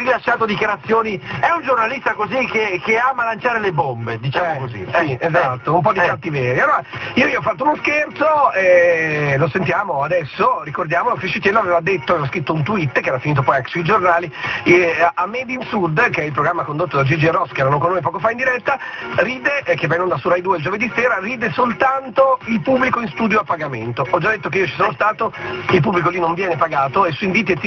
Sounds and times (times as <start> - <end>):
Music: 0.0 - 27.6
Radio: 0.0 - 27.6
Speech: 0.0 - 27.6.